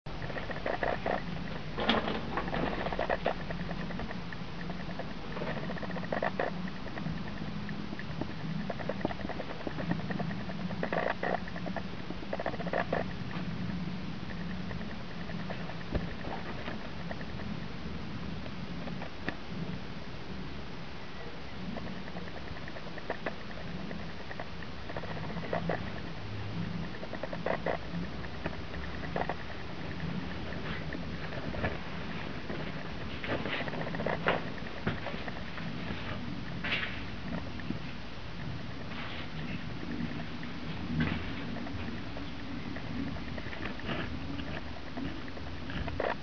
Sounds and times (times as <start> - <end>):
Inside, small room: 0.1 - 46.2.